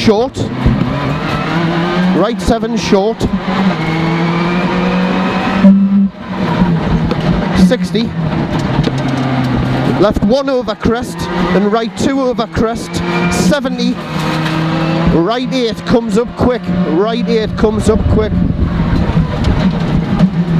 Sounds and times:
Speech: 0.0s - 0.5s, 2.2s - 3.3s, 7.6s - 8.1s, 10.0s - 14.0s, 15.1s - 18.4s
Skidding: 0.0s - 20.5s.

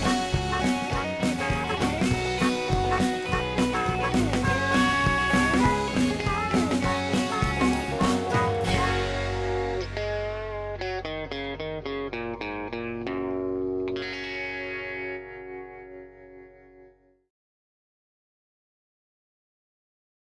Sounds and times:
Music: 0.0s - 17.3s.

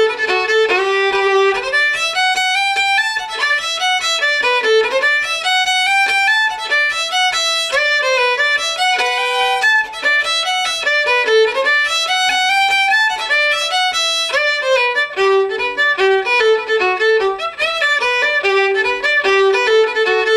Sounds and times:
Violin, fiddle: 0.0s - 20.3s.

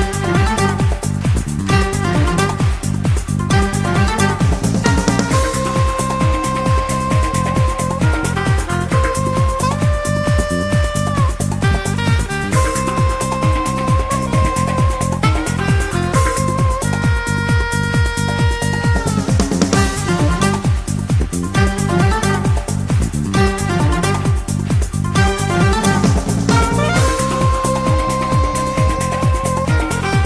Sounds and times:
Musical instrument: 0.0s - 30.2s.

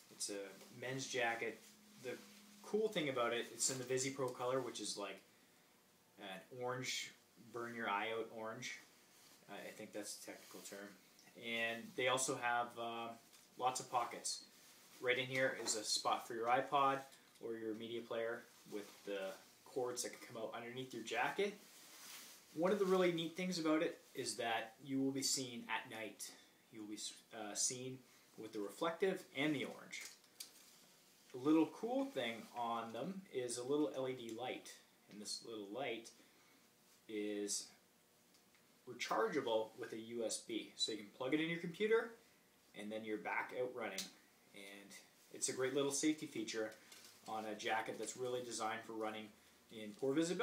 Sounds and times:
Speech: 0.0s - 5.3s, 6.2s - 8.9s, 9.5s - 21.6s, 22.6s - 30.2s, 31.3s - 36.2s, 37.1s - 37.8s, 38.9s - 50.4s.

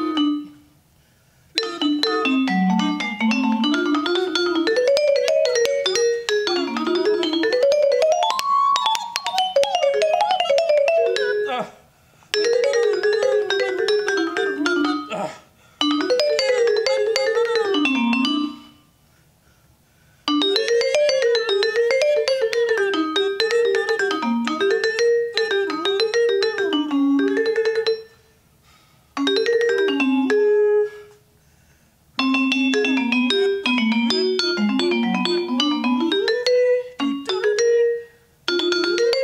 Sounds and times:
Vibraphone: 0.0s - 0.7s, 1.6s - 11.6s, 12.4s - 15.2s, 15.8s - 18.8s, 20.3s - 28.3s, 29.2s - 31.1s, 32.2s - 39.2s.

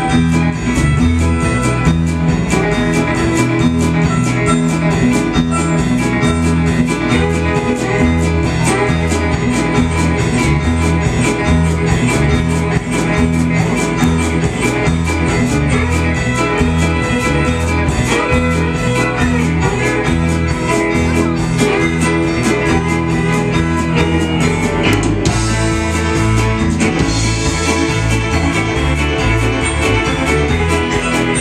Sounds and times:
Violin, fiddle: 0.0s - 31.4s.

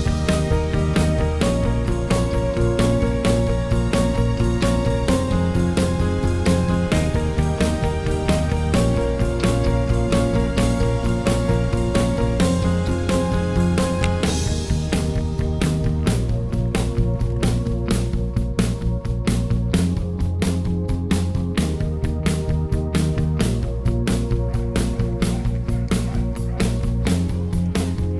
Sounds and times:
Music: 0.0s - 28.1s.

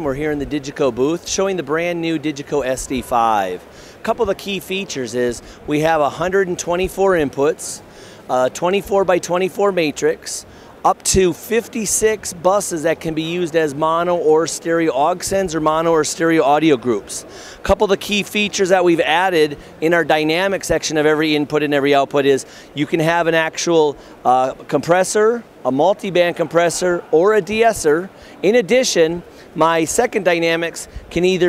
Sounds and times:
Speech: 0.0s - 31.4s.

